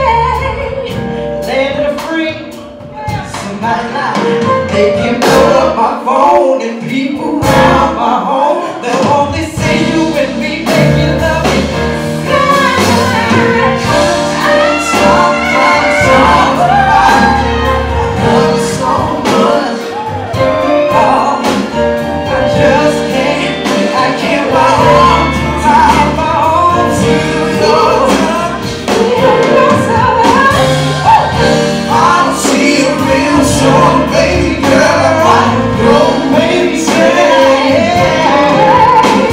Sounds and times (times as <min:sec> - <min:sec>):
Music: 0:00.0 - 0:39.3
Singing: 0:03.0 - 0:21.8.